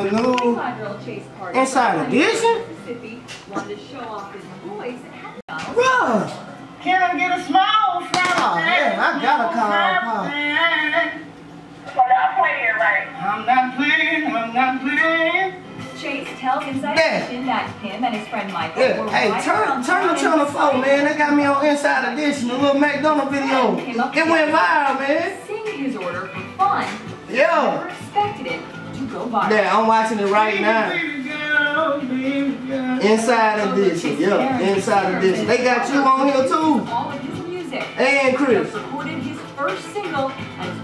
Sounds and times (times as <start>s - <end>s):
Music: 0.0s - 40.8s.